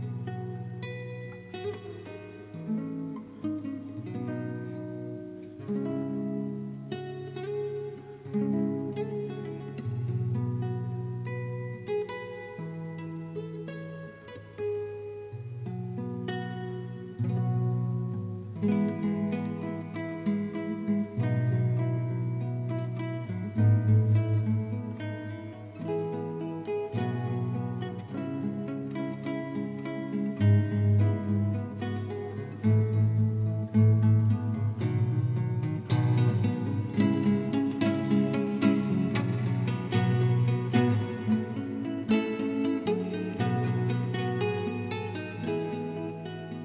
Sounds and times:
Strum: 0.0 - 46.6.

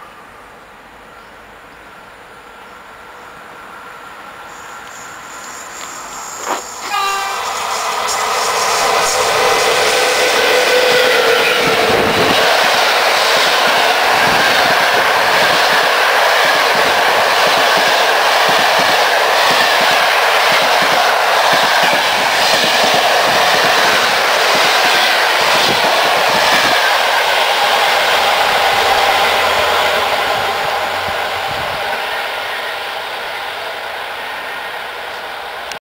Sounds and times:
Outside, rural or natural: 0.0 - 35.8
Railroad car, train wagon: 0.0 - 35.8
Train: 0.0 - 35.8.

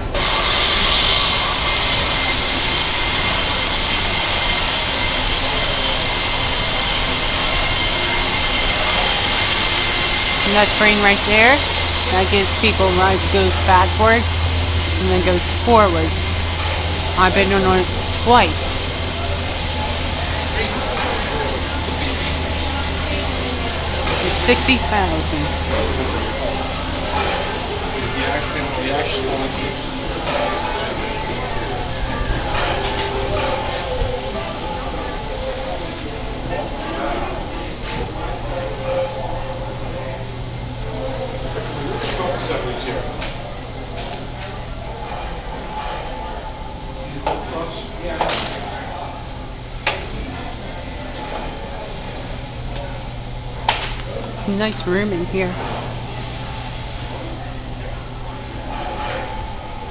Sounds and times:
Train: 0.0 - 17.2, 17.9 - 27.8
Speech: 10.5 - 14.3, 17.2 - 18.6.

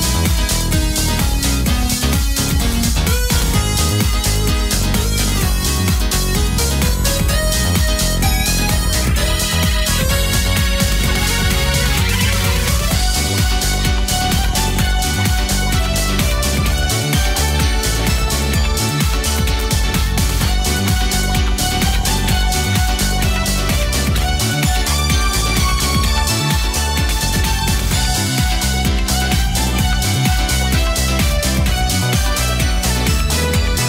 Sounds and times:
New-age music: 0.0 - 33.8.

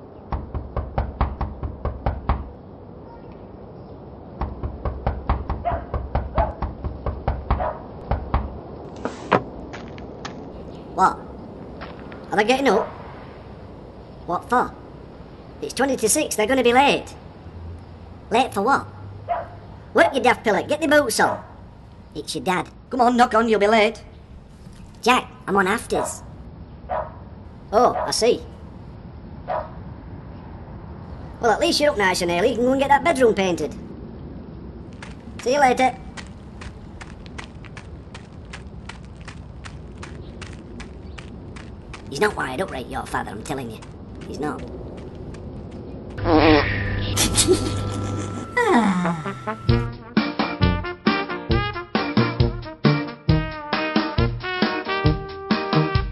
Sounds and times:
Speech: 11.0 - 11.3, 12.3 - 12.9, 14.3 - 14.8, 15.6 - 17.2, 18.3 - 18.9, 20.0 - 21.4, 22.2 - 24.1, 25.0 - 26.2, 27.7 - 28.5, 31.4 - 33.8, 35.4 - 36.0, 42.1 - 44.7.

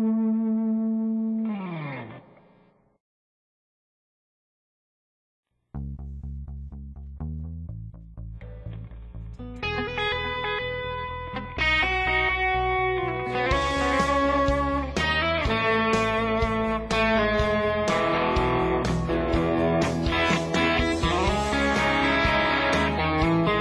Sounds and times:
Electric guitar: 0.0 - 2.9, 8.4 - 23.6
Tapping (guitar technique): 5.8 - 23.6.

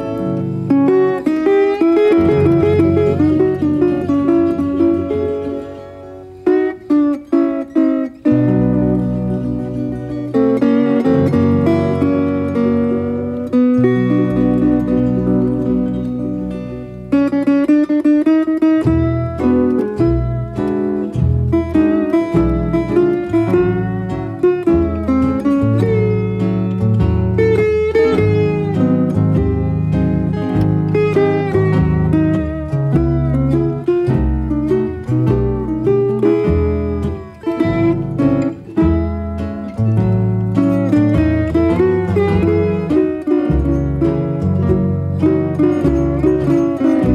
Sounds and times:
Acoustic guitar: 0.0 - 47.1.

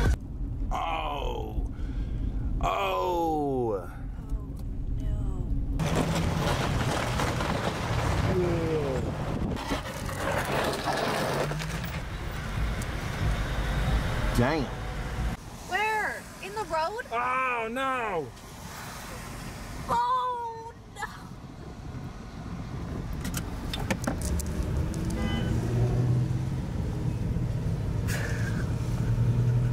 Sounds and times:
Outside, urban or manmade: 0.0 - 29.7
Traffic noise, roadway noise: 0.0 - 29.7.

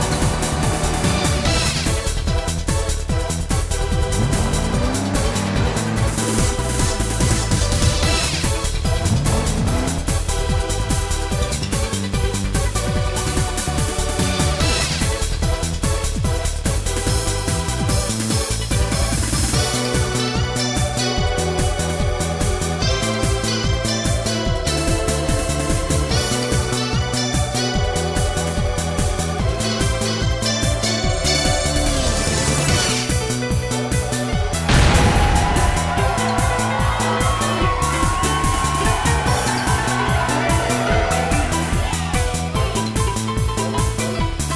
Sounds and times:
Music: 0.0 - 44.5.

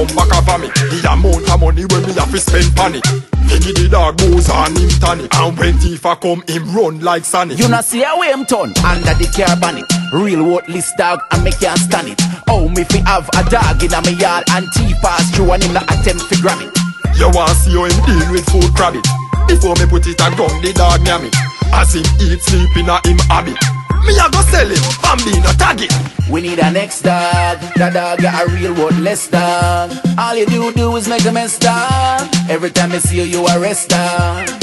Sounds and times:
Music: 0.0 - 34.6.

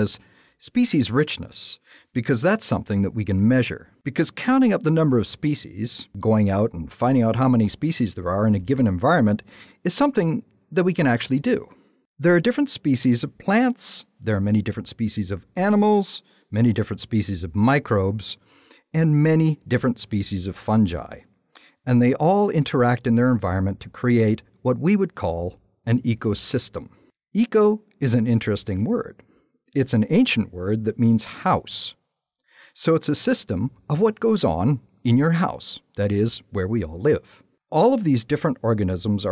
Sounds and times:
Speech: 0.0 - 29.2, 29.8 - 32.0, 32.7 - 39.3.

